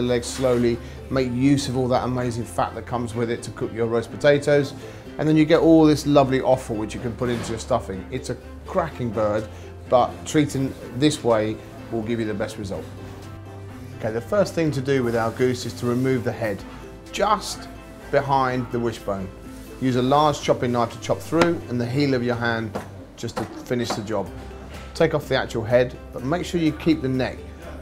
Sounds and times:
Speech: 0:00.0 - 0:12.9, 0:14.0 - 0:24.3, 0:25.0 - 0:27.4
Music: 0:00.0 - 0:27.8.

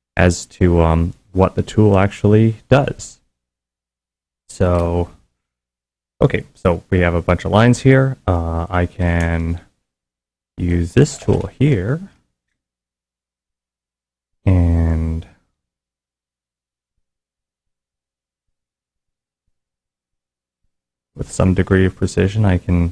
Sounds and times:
Speech: 0:00.2 - 0:03.2, 0:04.5 - 0:05.2, 0:06.2 - 0:09.7, 0:10.6 - 0:12.2, 0:14.5 - 0:15.4, 0:21.2 - 0:22.9.

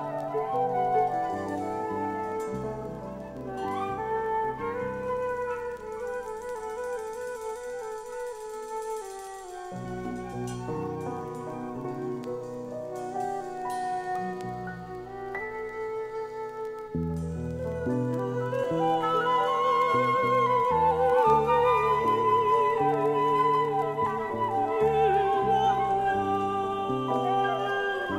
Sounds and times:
Music: 0:00.0 - 0:28.1.

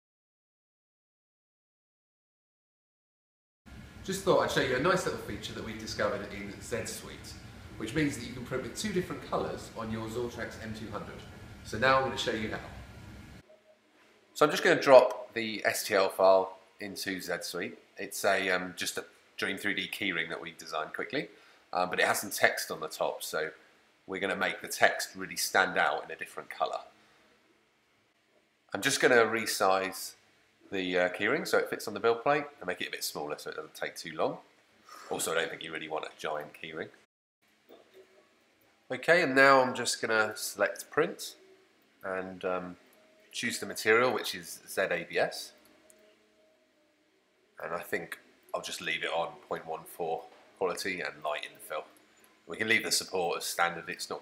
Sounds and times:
Speech: 0:04.1 - 0:12.8, 0:14.4 - 0:26.9, 0:28.7 - 0:34.4, 0:35.1 - 0:37.0, 0:38.9 - 0:41.4, 0:42.0 - 0:42.8, 0:43.4 - 0:45.6, 0:47.6 - 0:51.9, 0:52.5 - 0:54.2.

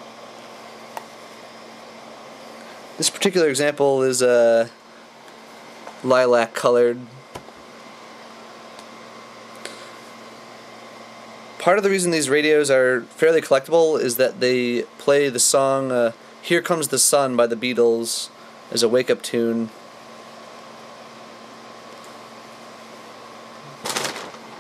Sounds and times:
Speech: 0:03.0 - 0:04.8, 0:06.0 - 0:07.2, 0:11.6 - 0:19.8.

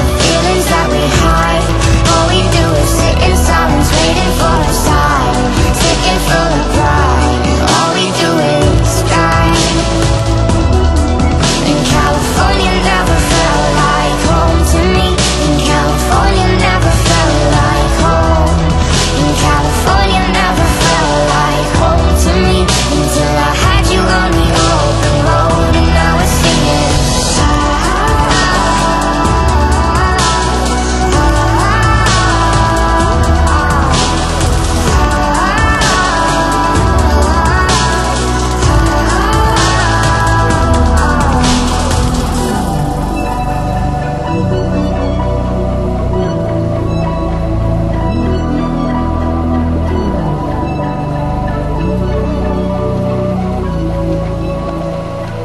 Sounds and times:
Soundtrack music: 0:00.0 - 0:55.4.

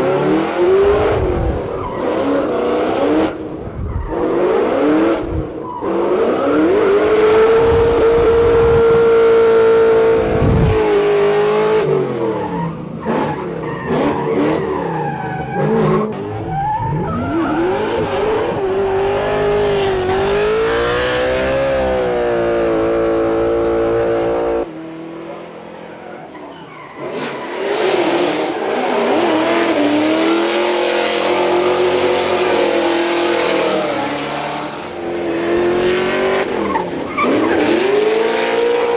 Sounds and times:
Race car, auto racing: 0:00.0 - 0:38.9
Skidding: 0:00.0 - 0:38.9.

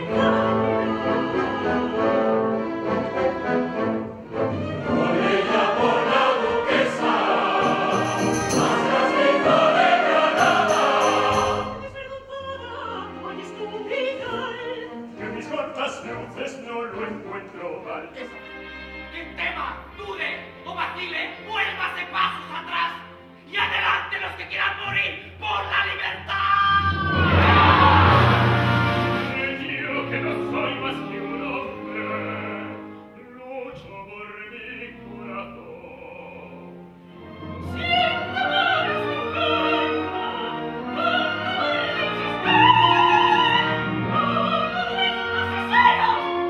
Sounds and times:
Choir: 0:00.0 - 0:03.7, 0:04.3 - 0:16.2, 0:26.8 - 0:32.8, 0:37.4 - 0:46.5
Opera: 0:00.0 - 0:46.5.

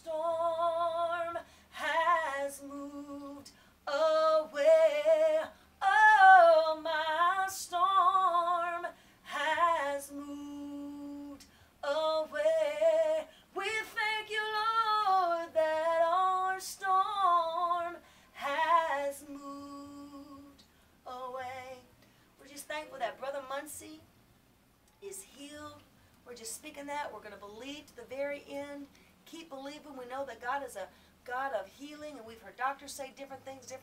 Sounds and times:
Inside, small room: 0:00.0 - 0:33.8.

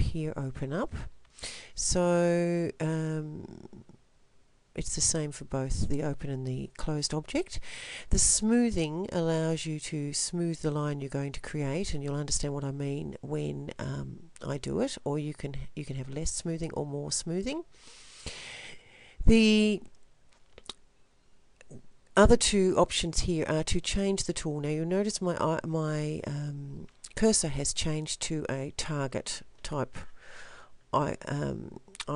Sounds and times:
Speech: 0:00.0 - 0:01.1, 0:01.8 - 0:03.9, 0:04.8 - 0:17.7, 0:19.3 - 0:19.9, 0:22.2 - 0:30.0, 0:31.0 - 0:32.1.

